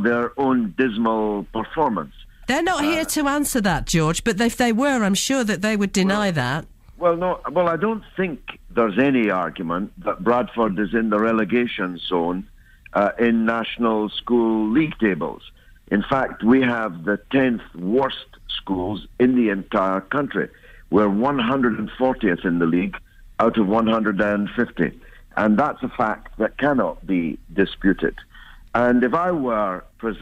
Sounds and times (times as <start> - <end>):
Speech: 0.0 - 28.2, 28.8 - 30.2.